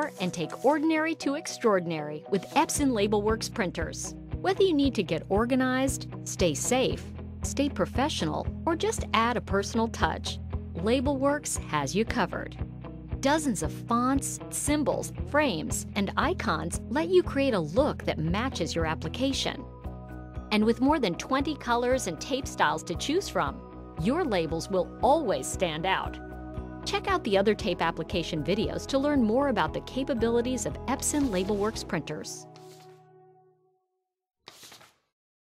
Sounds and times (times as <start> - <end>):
Speech: 0.0 - 12.6, 13.2 - 19.6, 20.5 - 26.2, 26.9 - 32.4
Music: 0.0 - 33.9.